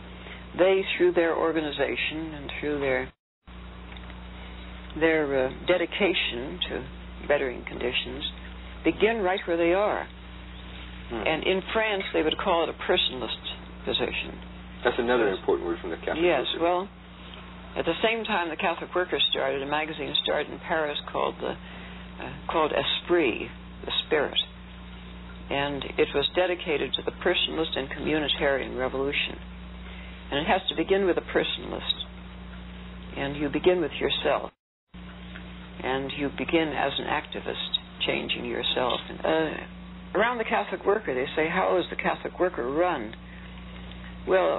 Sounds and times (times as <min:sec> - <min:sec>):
Speech: 0:00.6 - 0:03.2, 0:05.0 - 0:10.1, 0:11.1 - 0:16.9, 0:17.8 - 0:21.6, 0:22.2 - 0:24.5, 0:25.5 - 0:29.4, 0:30.3 - 0:32.1, 0:33.2 - 0:34.6, 0:35.8 - 0:43.2, 0:44.3 - 0:44.5.